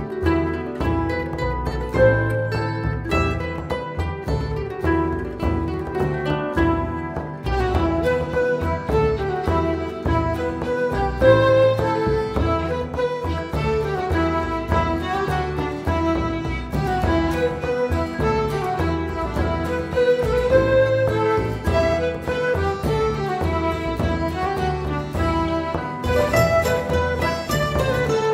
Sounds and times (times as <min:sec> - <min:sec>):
String section: 0:00.0 - 0:28.3
Violin, fiddle: 0:00.0 - 0:28.3.